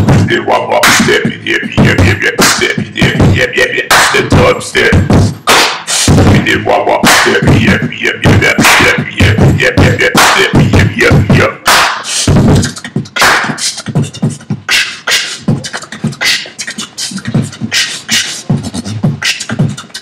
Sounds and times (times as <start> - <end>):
Beatboxing: 0.0 - 20.0.